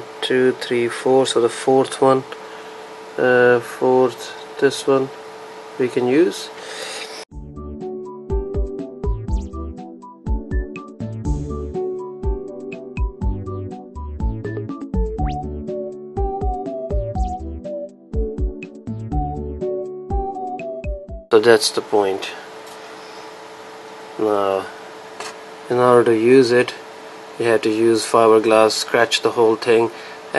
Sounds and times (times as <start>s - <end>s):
Speech: 0.2s - 2.4s, 3.2s - 5.2s, 5.8s - 6.6s, 21.3s - 22.5s, 24.2s - 24.8s, 25.7s - 26.8s, 27.4s - 30.3s
Music: 7.3s - 21.4s.